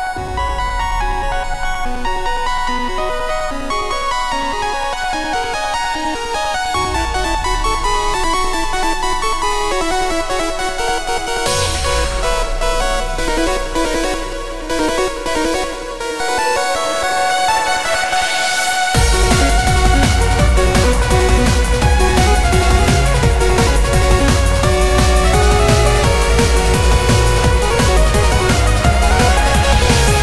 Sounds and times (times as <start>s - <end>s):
Musical instrument: 0.0s - 30.2s.